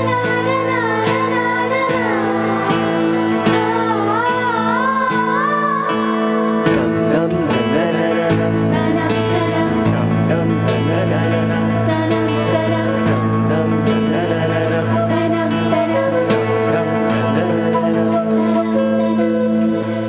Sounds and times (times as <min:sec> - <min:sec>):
Music: 0:00.0 - 0:20.0.